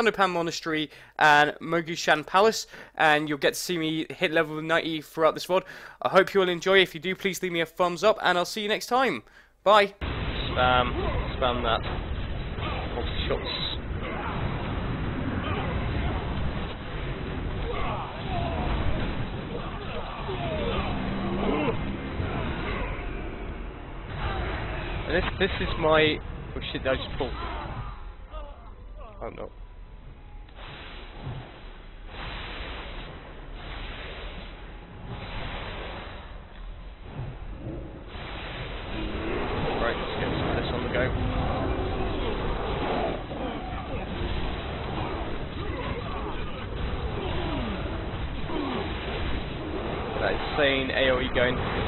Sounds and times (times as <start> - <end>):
Speech: 0.0 - 11.8, 50.2 - 51.6.